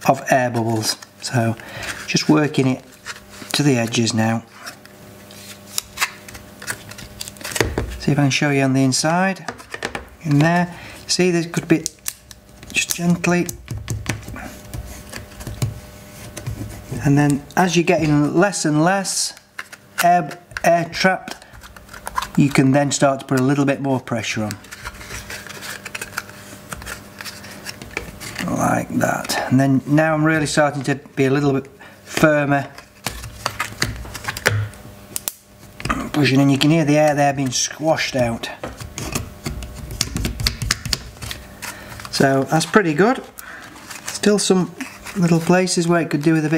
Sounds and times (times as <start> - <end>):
Speech: 0.0 - 2.9, 3.6 - 4.5, 8.0 - 9.5, 10.2 - 11.9, 12.7 - 13.6, 16.9 - 19.4, 20.0 - 21.4, 22.4 - 24.6, 28.4 - 32.8, 35.9 - 38.7, 42.1 - 43.3, 44.2 - 46.5.